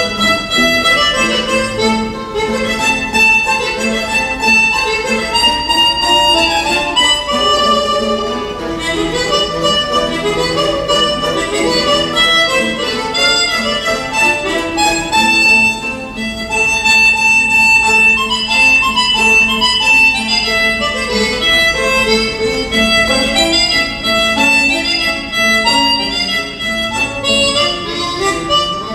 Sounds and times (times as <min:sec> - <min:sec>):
Pizzicato: 0:00.0 - 0:28.9.